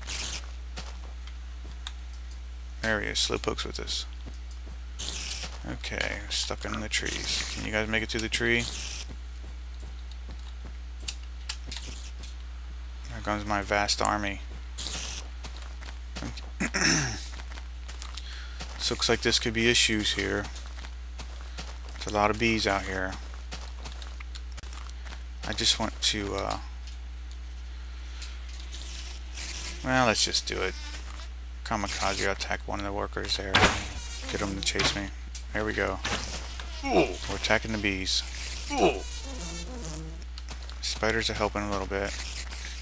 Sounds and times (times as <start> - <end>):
Fly, housefly: 5.0 - 6.2, 14.8 - 15.9, 28.6 - 32.4, 33.5 - 35.1, 36.1 - 40.3, 41.3 - 42.8
Mosquito: 38.3 - 40.2.